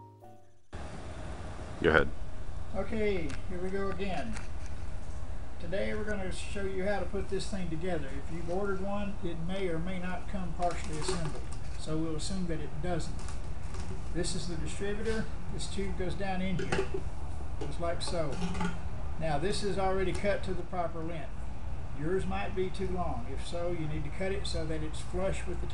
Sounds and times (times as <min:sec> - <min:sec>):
Speech: 0:01.8 - 0:02.1, 0:02.7 - 0:04.4, 0:05.6 - 0:13.2, 0:14.1 - 0:16.9, 0:17.6 - 0:18.5, 0:19.2 - 0:21.3, 0:22.0 - 0:25.7.